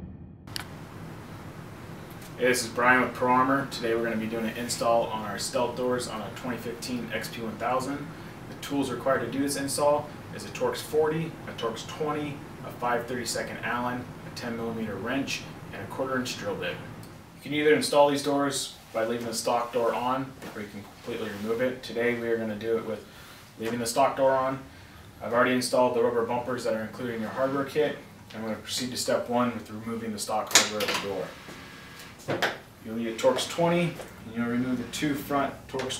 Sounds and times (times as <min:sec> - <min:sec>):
Speech: 0:02.4 - 0:31.4, 0:32.8 - 0:35.9.